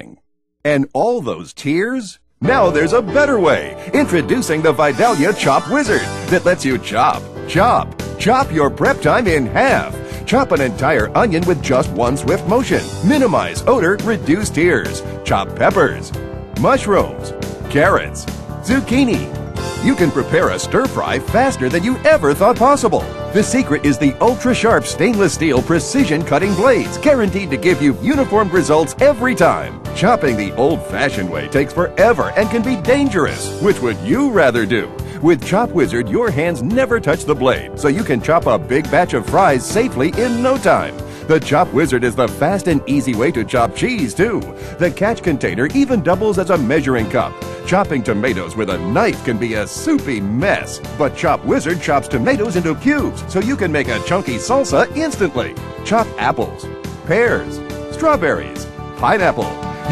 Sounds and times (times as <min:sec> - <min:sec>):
Speech: 0:00.0 - 0:59.9
Music: 0:02.2 - 0:59.9.